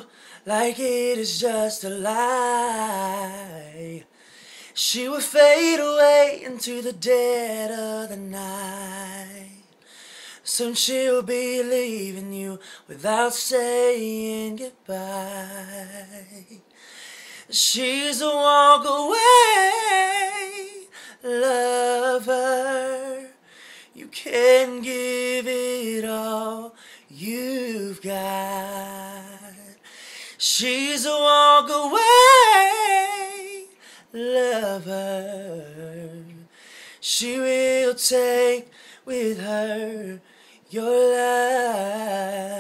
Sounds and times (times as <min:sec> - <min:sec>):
Male singing: 0:00.0 - 0:04.1, 0:04.8 - 0:09.7, 0:10.4 - 0:16.6, 0:17.5 - 0:23.4, 0:24.0 - 0:29.8, 0:30.4 - 0:42.6.